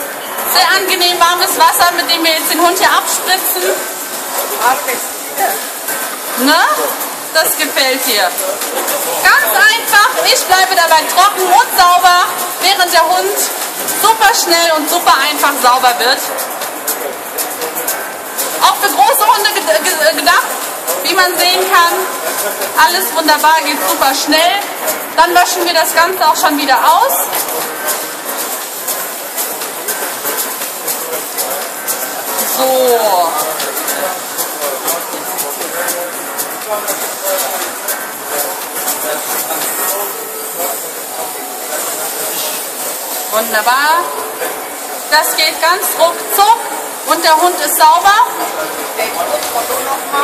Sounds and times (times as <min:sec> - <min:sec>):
Speech: 0:00.5 - 0:05.7, 0:06.4 - 0:28.2, 0:32.4 - 0:50.2.